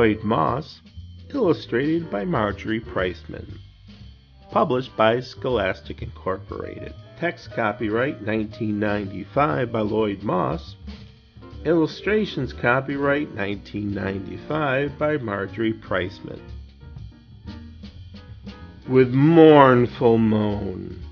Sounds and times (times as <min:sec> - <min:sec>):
Speech: 0:00.0 - 0:03.6, 0:04.5 - 0:10.8, 0:11.6 - 0:16.4, 0:18.9 - 0:21.1.